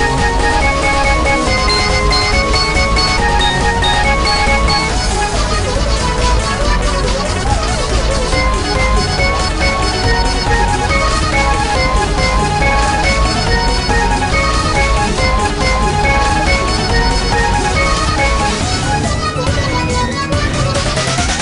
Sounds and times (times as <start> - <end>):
Music: 0.0 - 21.4.